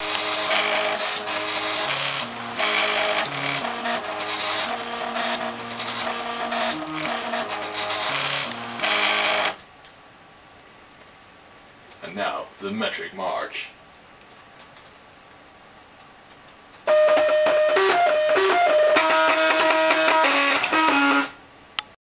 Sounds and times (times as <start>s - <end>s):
Speech: 12.0s - 13.8s.